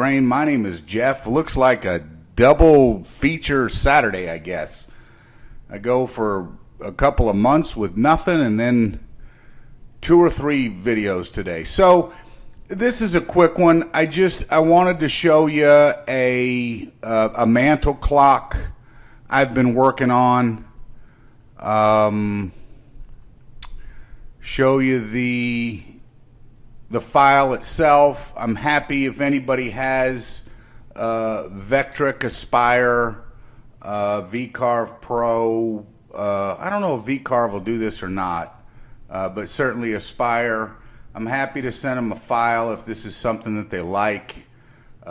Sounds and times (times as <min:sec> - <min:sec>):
Speech: 0:00.0 - 0:04.9, 0:05.7 - 0:09.1, 0:10.0 - 0:20.7, 0:21.6 - 0:22.6, 0:24.4 - 0:26.0, 0:26.9 - 0:45.1.